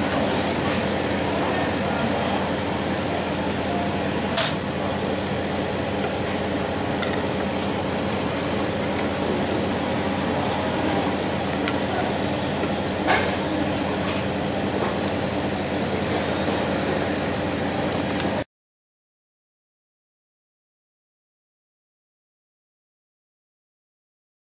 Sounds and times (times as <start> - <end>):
Inside, large room or hall: 0.0 - 18.4
Speech: 0.1 - 3.9, 9.4 - 15.0.